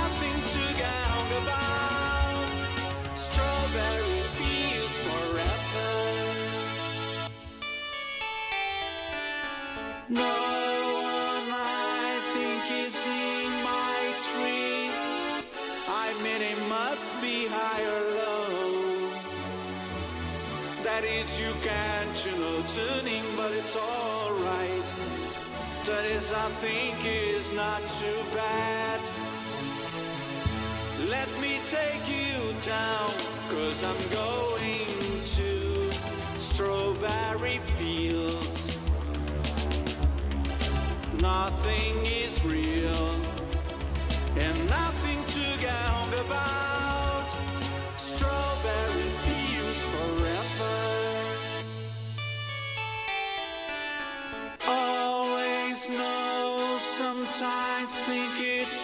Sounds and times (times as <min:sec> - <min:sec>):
Guitar: 0:00.0 - 0:58.8.